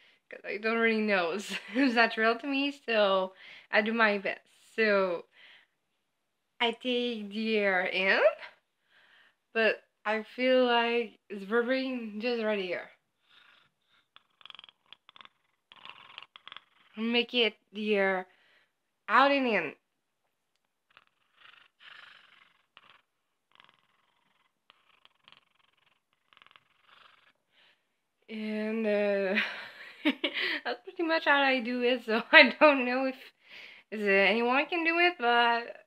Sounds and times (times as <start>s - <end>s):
Speech: 0.3s - 5.3s, 6.6s - 8.6s, 9.6s - 12.9s, 17.0s - 18.3s, 19.1s - 19.8s, 28.3s - 29.6s, 30.6s - 33.3s, 33.9s - 35.8s.